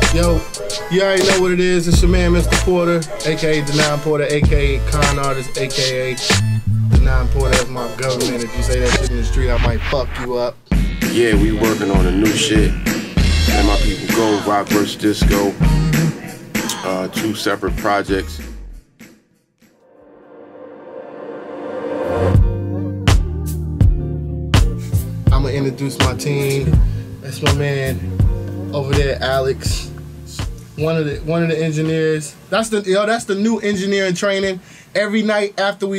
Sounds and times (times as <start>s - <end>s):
Speech: 0.0s - 6.4s, 7.0s - 12.8s, 13.5s - 15.6s, 16.6s - 18.5s, 25.3s - 28.0s, 28.7s - 35.9s
Music: 0.0s - 32.1s.